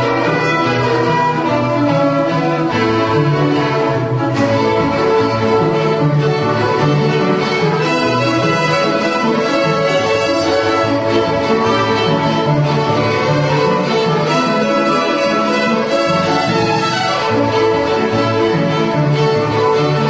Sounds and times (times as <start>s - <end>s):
String section: 0.0s - 20.0s.